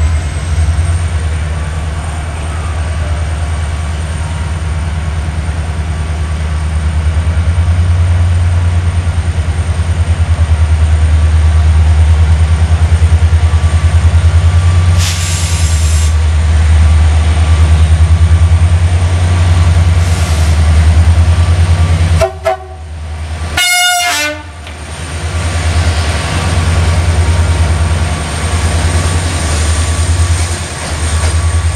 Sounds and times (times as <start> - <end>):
Railroad car, train wagon: 0.0 - 31.7
Train: 0.0 - 31.7.